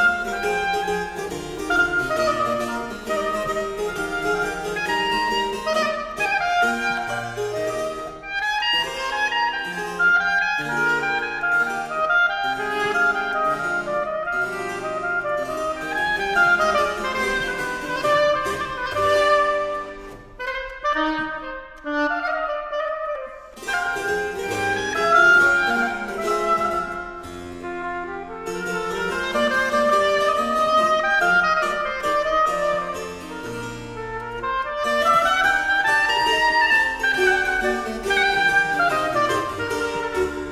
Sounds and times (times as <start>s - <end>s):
Harpsichord: 0.0s - 20.5s, 23.4s - 40.5s
Clarinet: 0.0s - 40.5s.